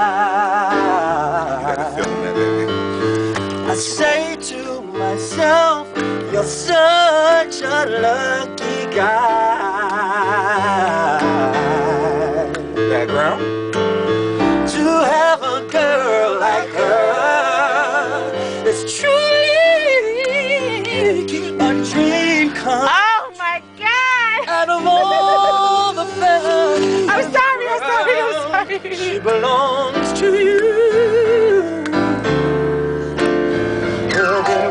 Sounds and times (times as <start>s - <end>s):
Male singing: 0.0s - 2.5s, 3.7s - 12.8s, 14.7s - 32.2s, 34.1s - 34.7s
Music: 0.0s - 34.7s.